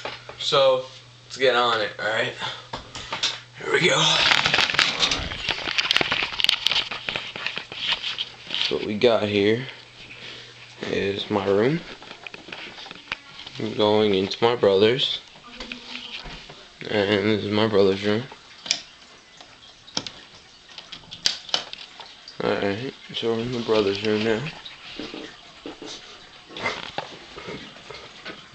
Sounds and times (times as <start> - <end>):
Speech: 10.8 - 11.9, 22.4 - 24.6.